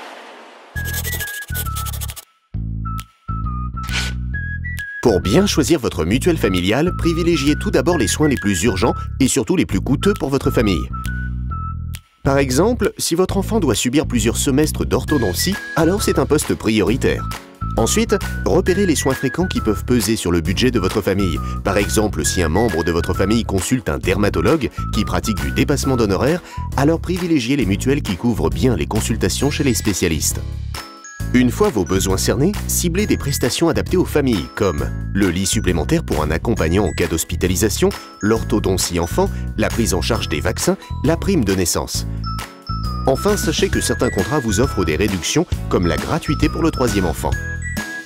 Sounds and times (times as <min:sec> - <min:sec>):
Music: 0:00.8 - 0:48.0
Speech: 0:05.0 - 0:10.9, 0:12.3 - 0:30.4, 0:31.3 - 0:42.1, 0:43.0 - 0:47.4.